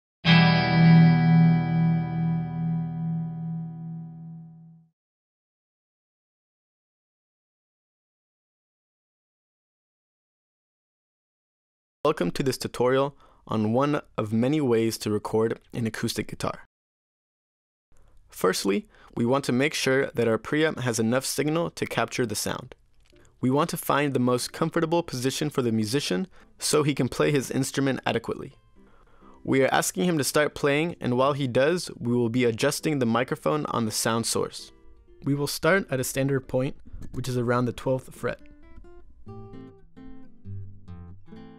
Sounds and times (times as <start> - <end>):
Effects unit: 0.2 - 4.9, 34.6 - 35.2, 38.3 - 41.5
Guitar: 0.2 - 4.9, 26.3 - 41.5.